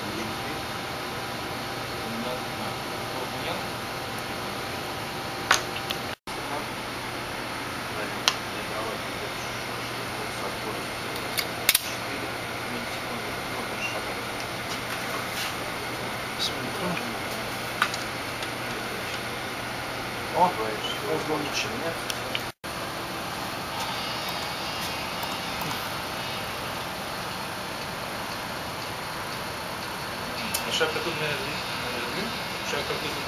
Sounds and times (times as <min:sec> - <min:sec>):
Speech: 0:00.0 - 0:00.7, 0:02.0 - 0:03.7, 0:06.3 - 0:06.7, 0:07.9 - 0:11.2, 0:11.8 - 0:14.4, 0:16.4 - 0:17.5, 0:20.3 - 0:22.1, 0:30.4 - 0:33.2.